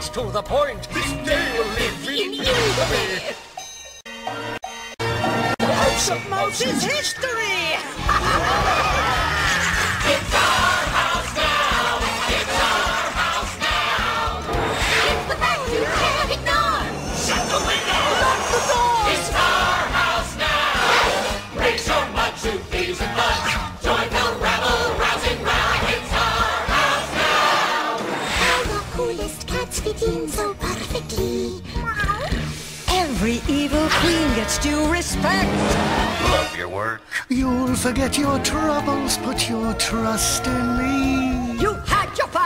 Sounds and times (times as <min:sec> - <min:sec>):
Music: 0:00.0 - 0:42.4.